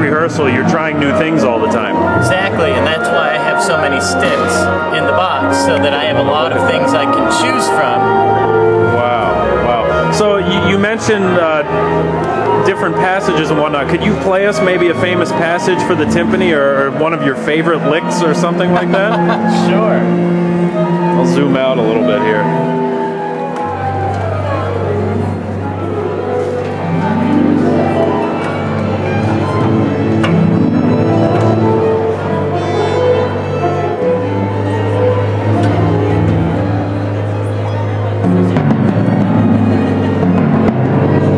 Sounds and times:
Orchestra: 0:00.0 - 0:41.3.

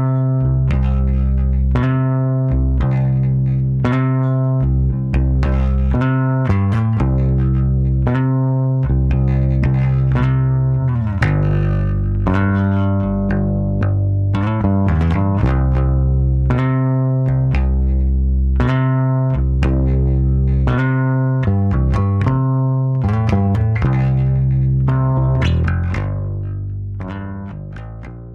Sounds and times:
Bass guitar: 0:00.0 - 0:28.3
Electronic tuner: 0:00.0 - 0:28.3.

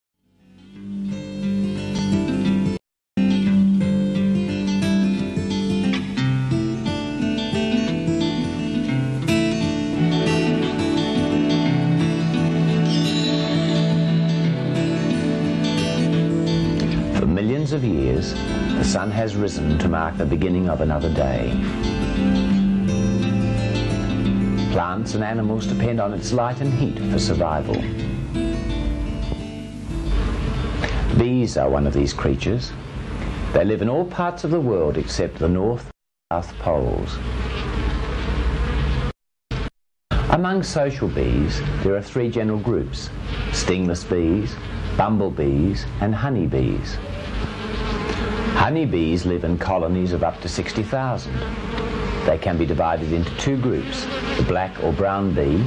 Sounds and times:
Fly, housefly: 0:07.7 - 0:28.0, 0:36.6 - 0:39.2, 0:46.1 - 0:55.6
Bee, wasp, etc.: 0:36.6 - 0:39.2, 0:40.7 - 0:55.6.

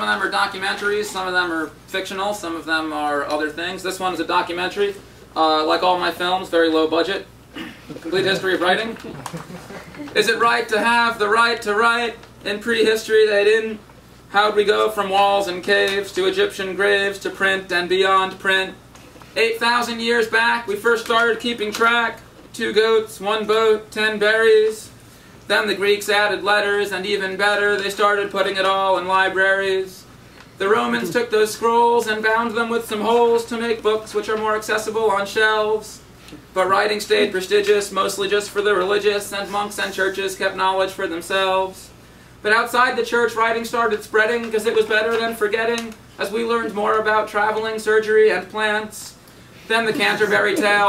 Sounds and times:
Speech: 0:00.0 - 0:07.3, 0:07.9 - 0:18.8, 0:19.4 - 0:50.8.

